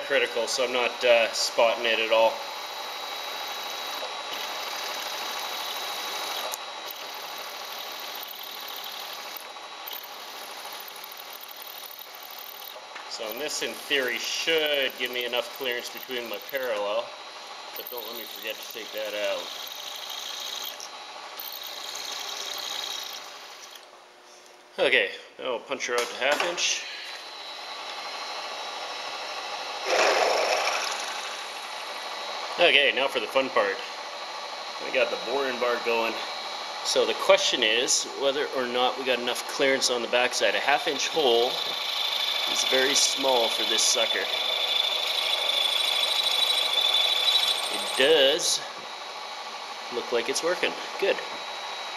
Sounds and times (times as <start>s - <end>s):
Speech: 0.0s - 2.4s, 13.1s - 17.1s, 17.8s - 19.5s, 24.8s - 26.9s, 32.6s - 33.9s, 34.8s - 36.3s, 36.9s - 41.6s, 42.5s - 44.3s, 47.8s - 48.8s, 49.9s - 51.3s.